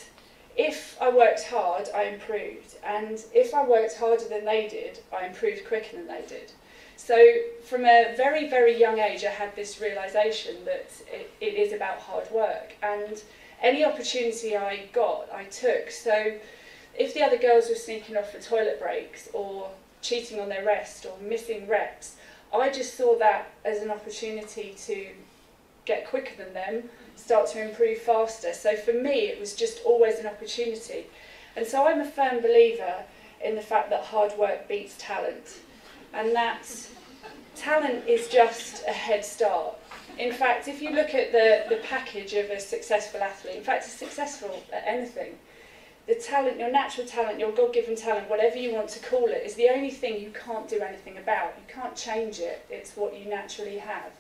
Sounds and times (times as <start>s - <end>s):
Female speech, woman speaking: 0.0s - 16.4s, 17.0s - 25.2s, 25.9s - 37.0s, 37.6s - 45.4s, 46.1s - 54.2s.